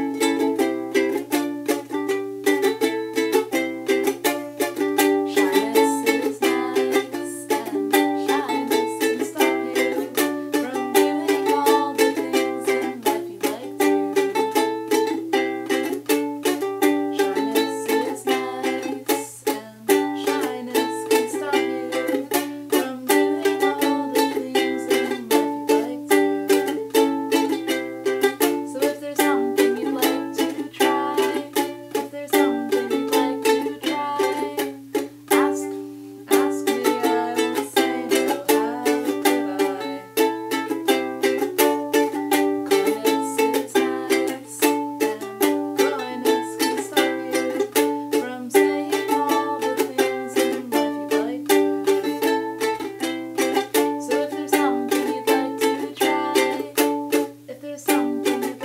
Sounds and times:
Guitar: 0.0 - 58.6
Inside, small room: 0.0 - 58.6
Ukulele: 0.0 - 58.6.

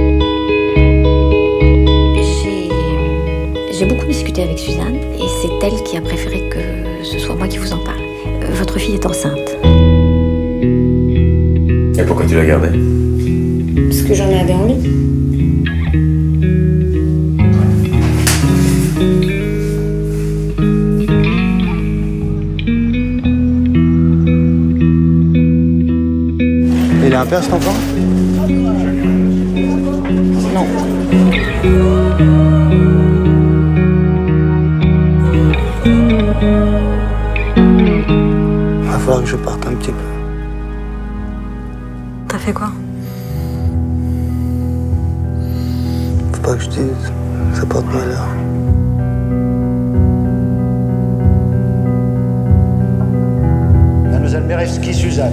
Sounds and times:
Music: 0.0 - 55.3.

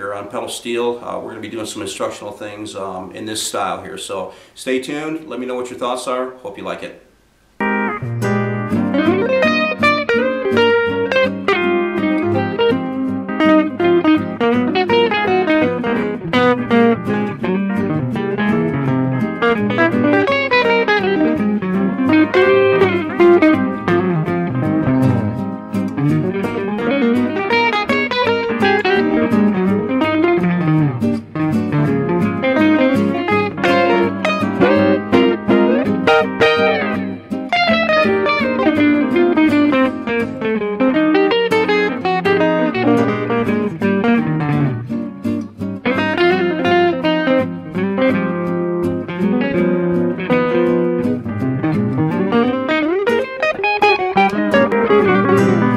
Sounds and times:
Speech: 0.0 - 7.0
Music: 7.6 - 55.7.

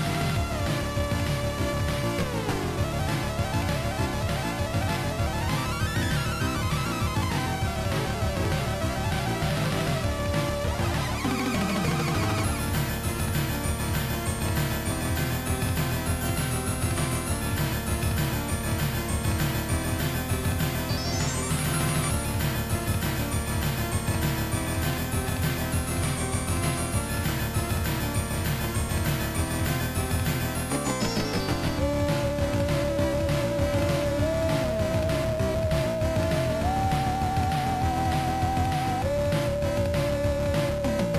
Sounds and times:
Music: 0.0 - 41.1.

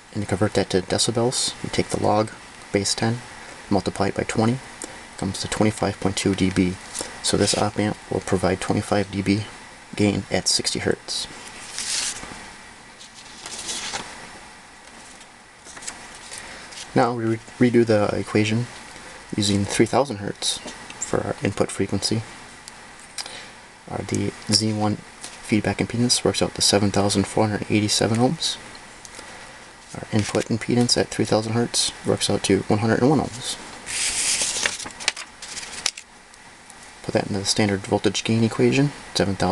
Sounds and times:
Inside, small room: 0.0 - 39.5
Speech: 0.1 - 11.3, 16.9 - 18.7, 19.3 - 22.3, 23.9 - 28.6, 29.9 - 33.6, 37.0 - 39.5.

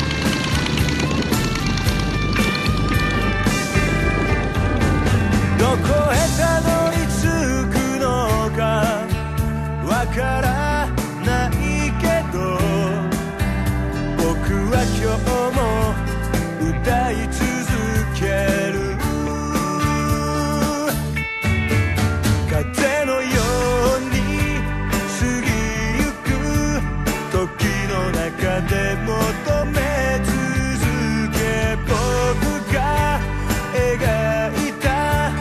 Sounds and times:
Music: 0.0 - 35.4.

